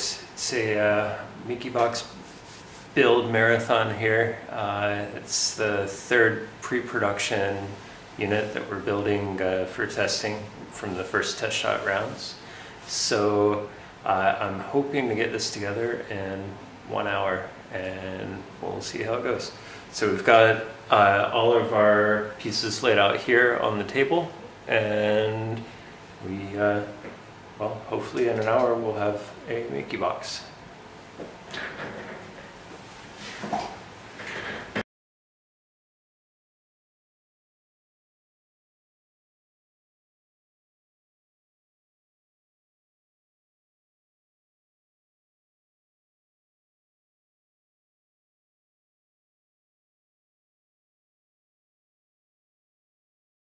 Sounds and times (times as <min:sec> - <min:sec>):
Speech: 0:00.0 - 0:02.2, 0:03.0 - 0:30.6.